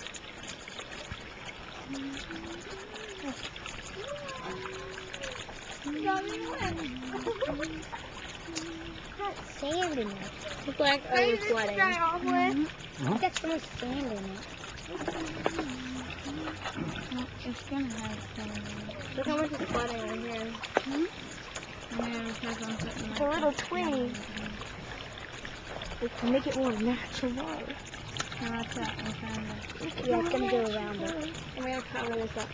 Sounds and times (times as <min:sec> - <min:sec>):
Stream: 0:00.0 - 0:32.5.